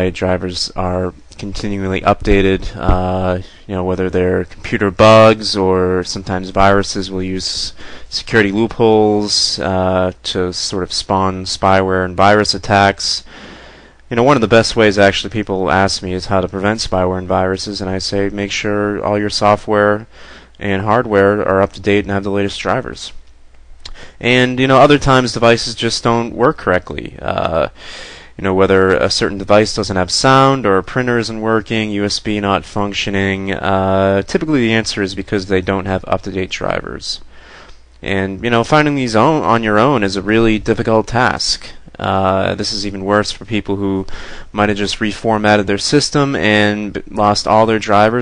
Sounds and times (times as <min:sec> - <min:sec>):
Speech: 0:00.0 - 0:13.3, 0:14.1 - 0:23.2, 0:23.9 - 0:37.3, 0:38.0 - 0:48.2.